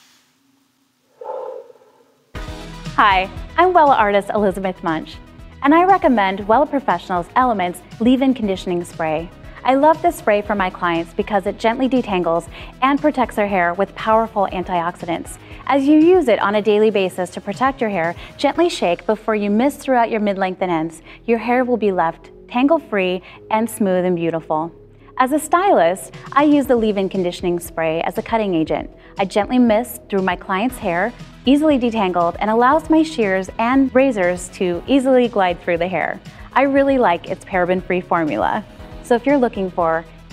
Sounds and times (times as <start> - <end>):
Music: 2.2 - 40.3
Speech: 3.0 - 40.0.